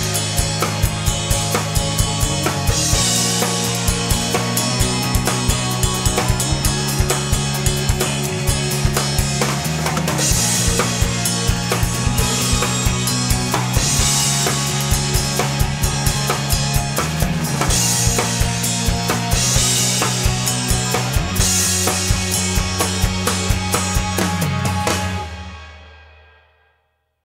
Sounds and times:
Music: 0.0 - 27.2.

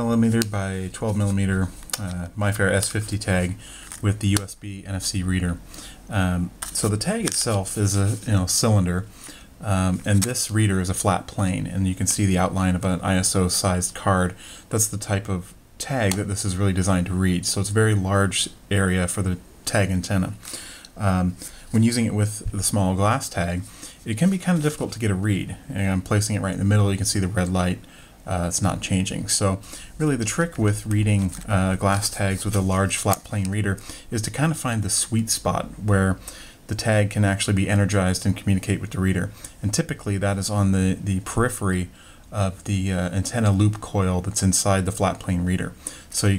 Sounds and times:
Speech: 0.0 - 20.4, 21.0 - 46.3.

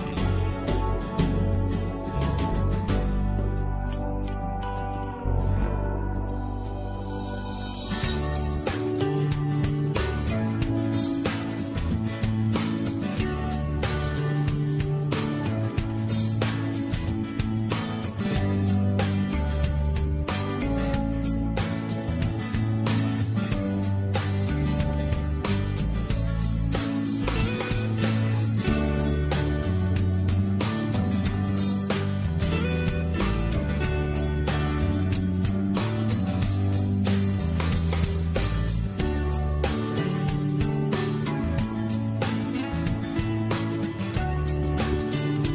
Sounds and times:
Music: 0.0 - 45.5.

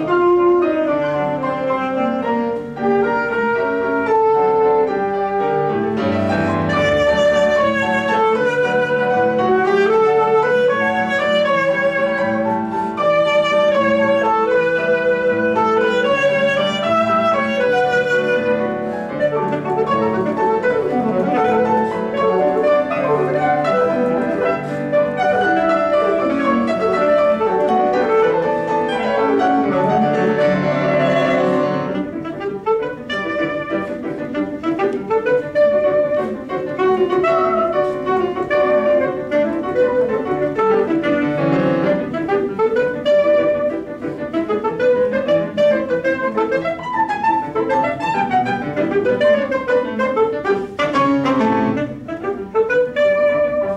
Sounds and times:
Piano: 0.0 - 53.7
Saxophone: 0.0 - 53.7.

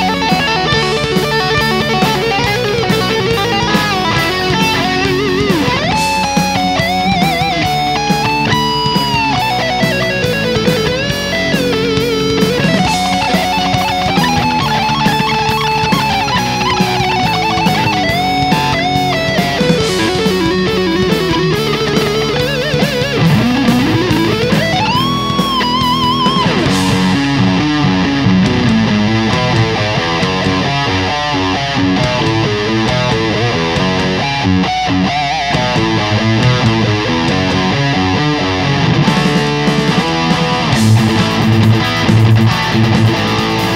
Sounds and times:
Bass guitar: 0.0 - 43.7.

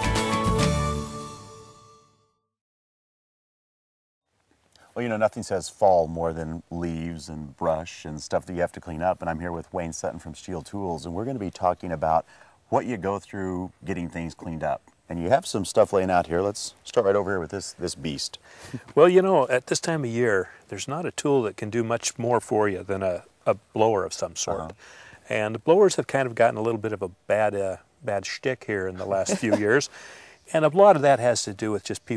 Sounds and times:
Speech: 4.9 - 29.9, 30.5 - 32.1.

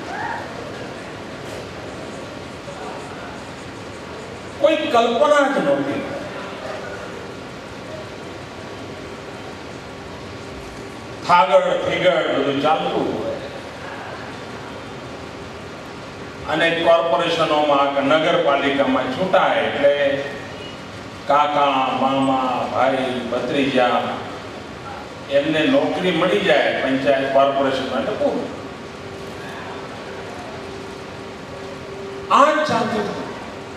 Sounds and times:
Narration, monologue: 4.5 - 6.3, 11.0 - 13.7, 15.8 - 28.8, 32.2 - 33.5
Male speech, man speaking: 4.6 - 6.3, 11.2 - 13.5, 16.5 - 20.4, 21.3 - 24.3, 25.3 - 28.6, 32.3 - 33.3.

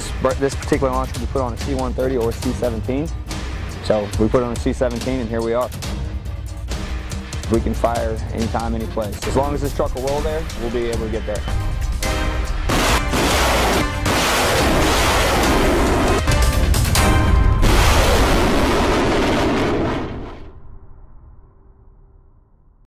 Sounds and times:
Music: 0.0 - 22.8
Artillery fire: 12.6 - 16.3, 17.1 - 20.6.

